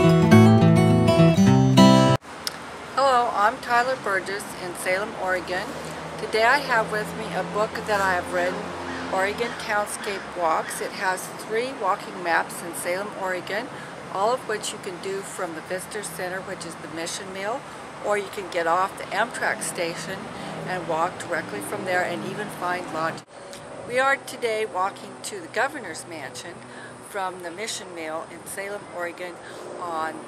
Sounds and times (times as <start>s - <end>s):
Speech: 3.0s - 23.3s, 23.9s - 30.2s.